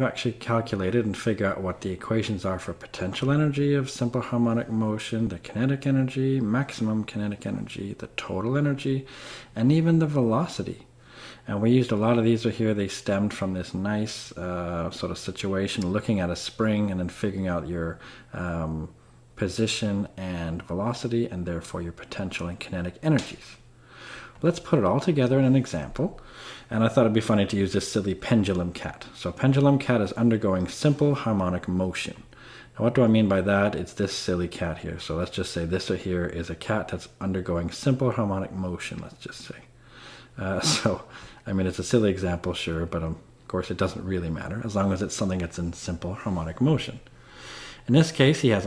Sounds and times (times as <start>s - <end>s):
Speech: 0.0s - 23.6s, 24.4s - 39.7s, 40.4s - 47.1s, 47.8s - 48.6s.